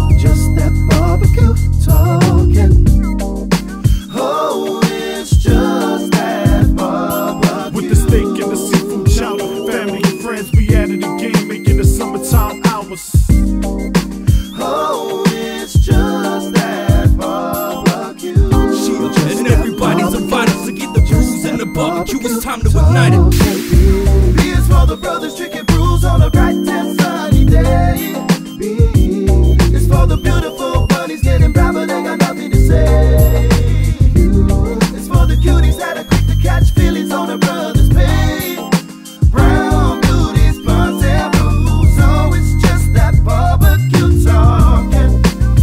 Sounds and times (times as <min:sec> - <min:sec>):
Rhythm and blues: 0:00.0 - 0:45.6.